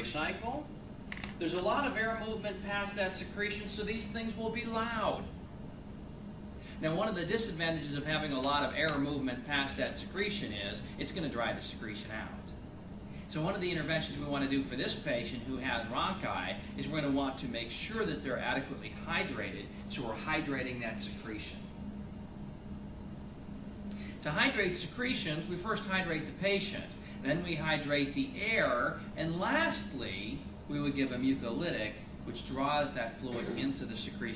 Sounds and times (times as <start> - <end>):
Speech: 0.0 - 0.7, 1.4 - 5.3, 6.8 - 12.6, 13.3 - 21.7, 24.2 - 34.3.